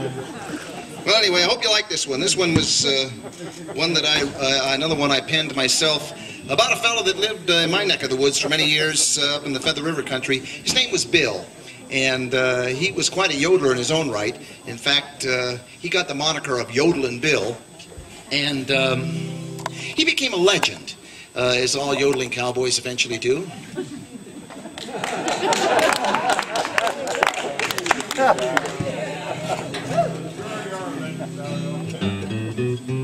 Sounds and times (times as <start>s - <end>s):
Speech: 0.4s - 19.0s, 20.0s - 23.8s.